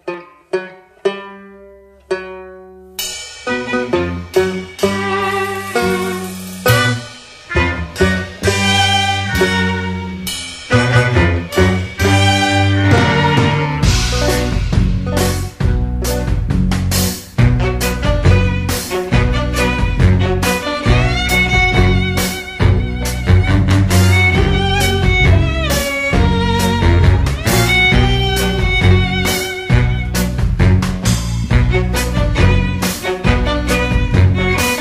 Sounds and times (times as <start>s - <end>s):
Music: 0.0s - 34.8s.